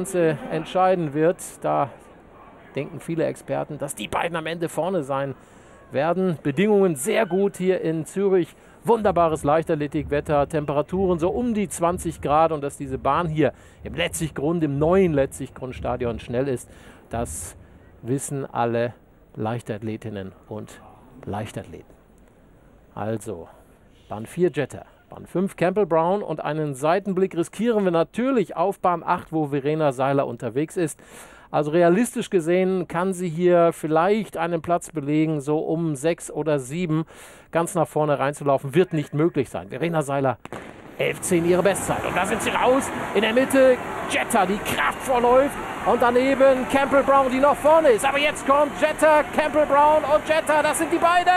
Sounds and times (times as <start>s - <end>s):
Speech: 0.0s - 21.9s, 23.0s - 40.4s, 41.0s - 51.3s
Outside, urban or manmade: 0.0s - 51.3s.